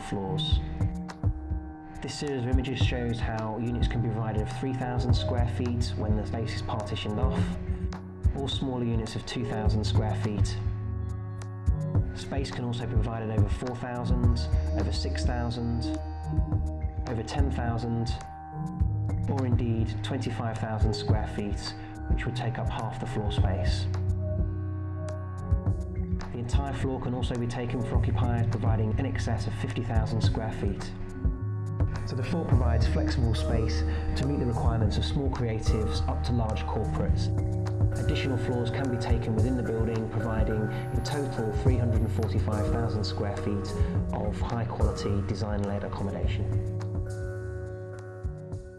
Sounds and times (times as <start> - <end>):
Speech: 0.0 - 0.7, 2.0 - 7.6, 8.3 - 10.8, 12.1 - 16.0, 17.1 - 18.3, 19.3 - 23.9, 26.3 - 31.0, 32.0 - 37.4, 38.0 - 46.6
Music: 0.0 - 48.7.